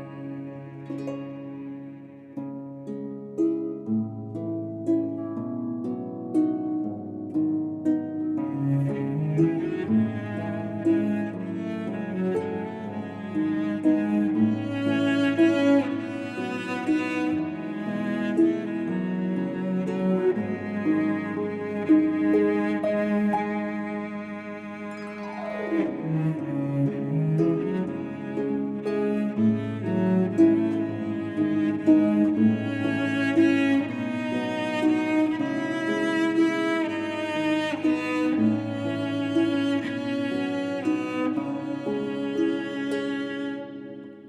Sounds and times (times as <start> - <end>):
Cello: 0.0 - 44.2
Harp: 0.0 - 44.2
Pizzicato: 0.0 - 44.2.